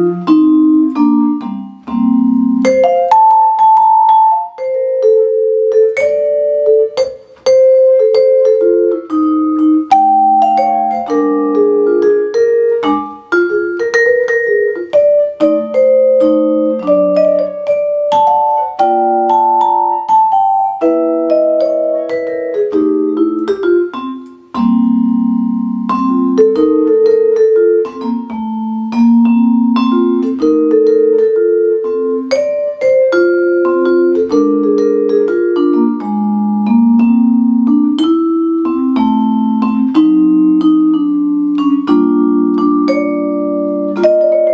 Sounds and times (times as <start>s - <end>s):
Vibraphone: 0.0s - 44.5s.